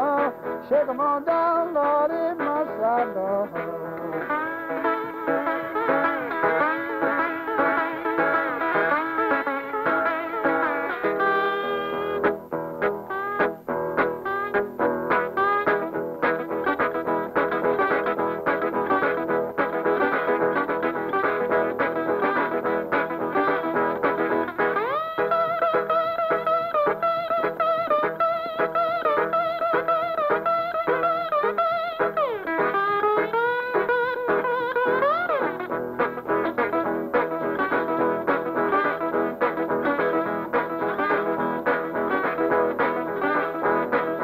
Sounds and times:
Singing: 0.0 - 3.8
Acoustic guitar: 0.0 - 44.2.

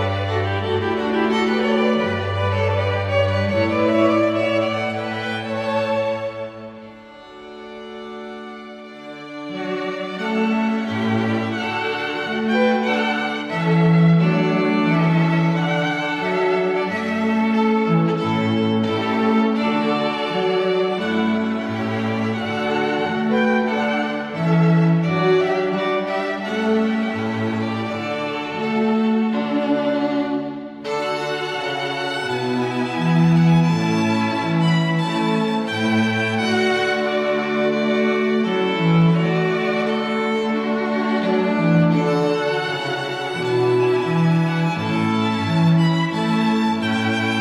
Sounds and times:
Classical music: 0.0 - 47.4.

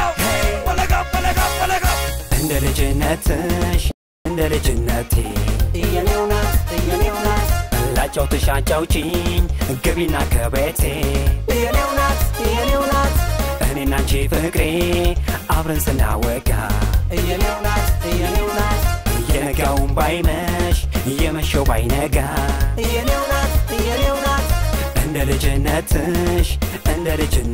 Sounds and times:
Middle Eastern music: 0.0 - 3.2, 4.3 - 27.5
Dance music: 0.0 - 27.5
Rhythm and blues: 0.0 - 27.5.

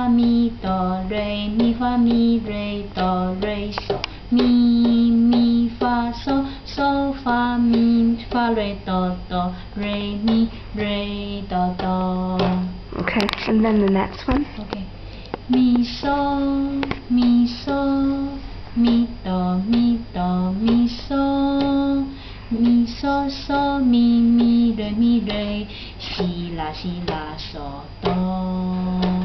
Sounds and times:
Lullaby: 0.0 - 12.8, 15.5 - 29.2
Speech: 13.0 - 14.9.

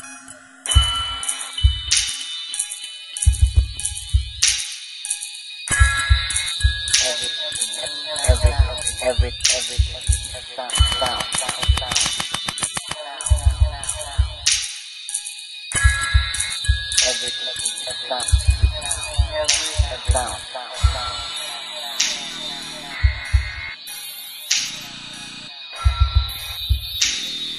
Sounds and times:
Electronic music: 0.0 - 27.5.

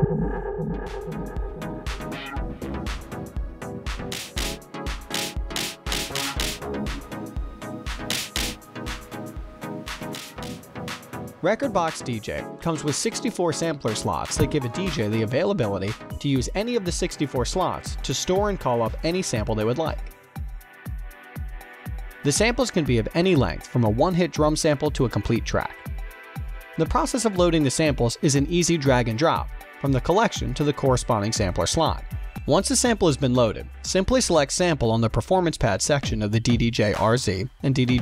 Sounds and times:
Speech: 11.4 - 20.1, 22.2 - 25.8, 26.8 - 38.0.

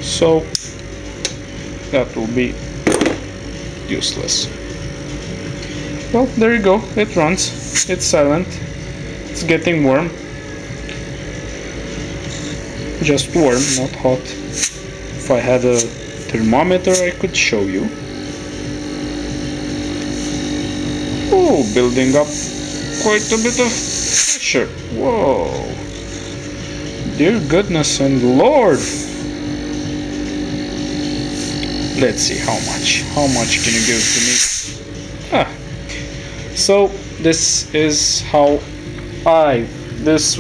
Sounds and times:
Speech: 0.0 - 0.5, 1.9 - 2.6, 3.9 - 4.6, 6.1 - 8.6, 9.4 - 10.2, 13.0 - 14.4, 15.2 - 18.0, 21.3 - 22.4, 23.0 - 25.8, 27.1 - 28.9, 32.0 - 34.4, 36.6 - 38.7, 39.3 - 40.4.

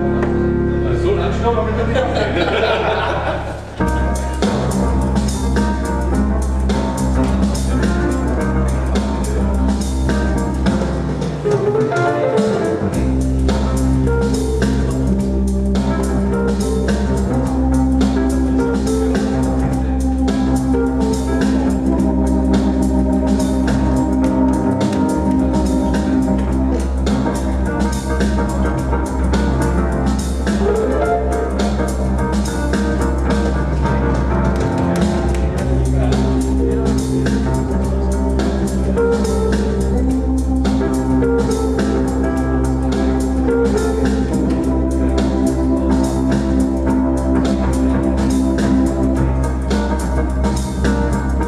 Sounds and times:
Music: 0.0 - 51.4.

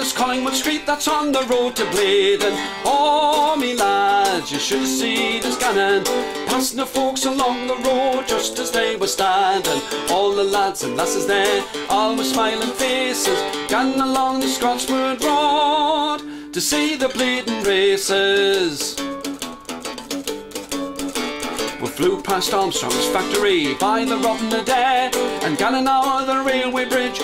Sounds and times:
Music: 0.0 - 27.2.

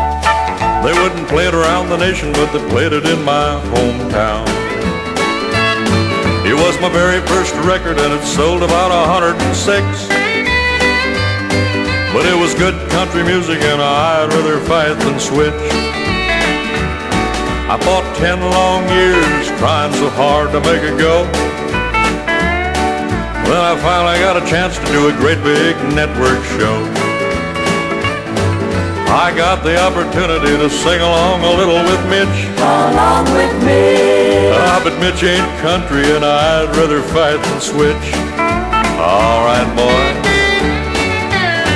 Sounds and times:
Country: 0.0 - 41.7.

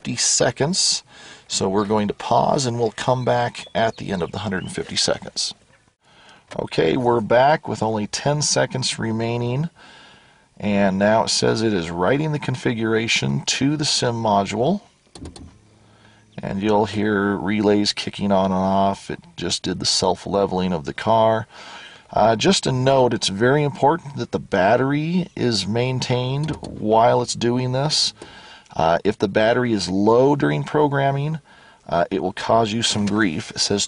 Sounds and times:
Speech: 0.0 - 5.6, 6.5 - 9.8, 10.6 - 14.9, 16.4 - 21.5, 22.1 - 33.8.

